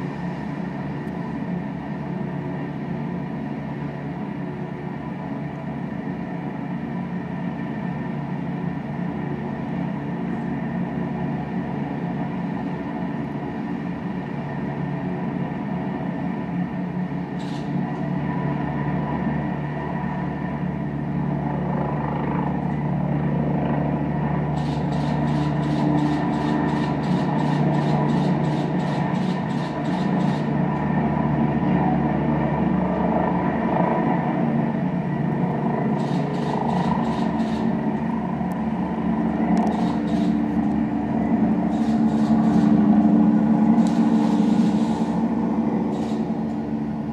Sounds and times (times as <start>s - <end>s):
Helicopter: 0.0s - 47.1s.